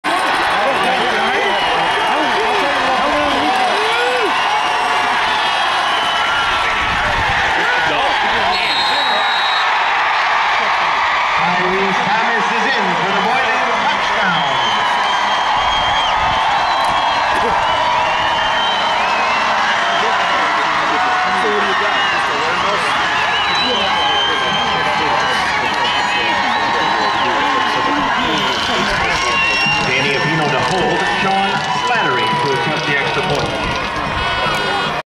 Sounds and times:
Speech: 0.5 - 4.0, 11.4 - 14.7, 23.5 - 33.7.

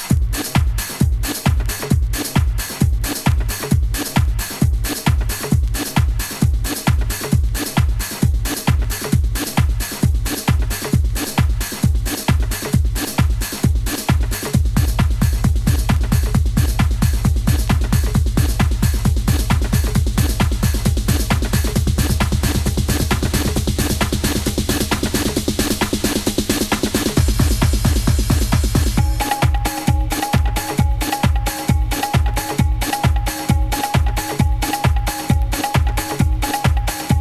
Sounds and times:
Drum: 0.0 - 37.2.

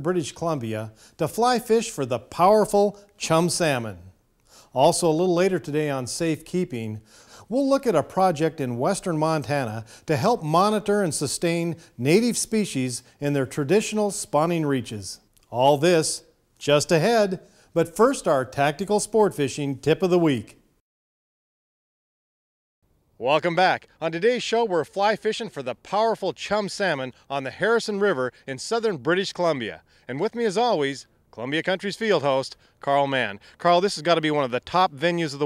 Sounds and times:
Speech: 0.0 - 4.1, 4.8 - 20.6, 23.2 - 35.4.

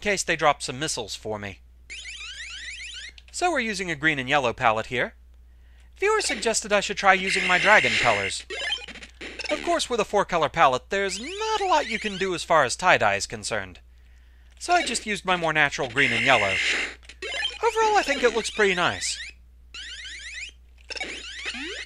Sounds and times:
Speech: 0.0 - 1.6, 3.4 - 5.2, 6.0 - 8.4, 9.5 - 13.8, 14.6 - 16.6, 17.6 - 19.2.

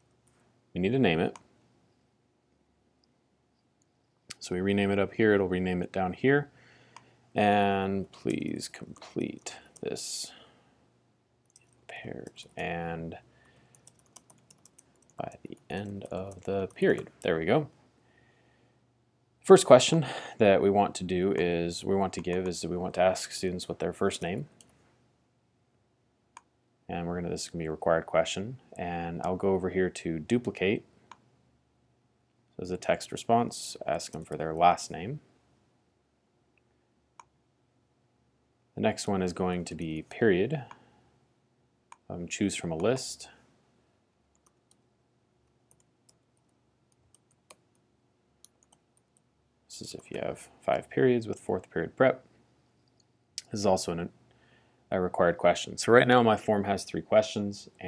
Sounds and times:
Speech: 0.8 - 1.4, 4.3 - 6.6, 7.4 - 10.4, 11.9 - 13.3, 15.2 - 17.8, 19.4 - 24.6, 26.9 - 30.9, 32.6 - 35.3, 38.8 - 40.8, 42.1 - 43.4, 49.7 - 52.3, 53.4 - 54.2, 54.9 - 57.8.

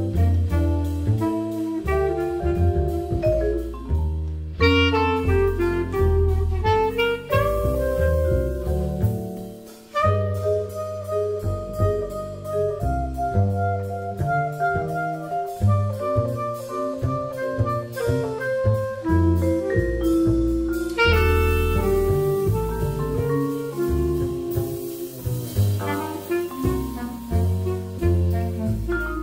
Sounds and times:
Saxophone: 0.0 - 3.5, 4.6 - 29.2.

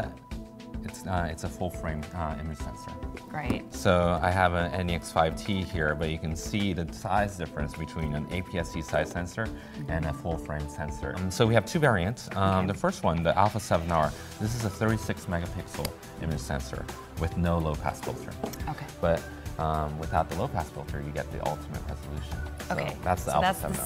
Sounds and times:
Music: 0.0 - 23.8
Speech: 0.9 - 23.8.

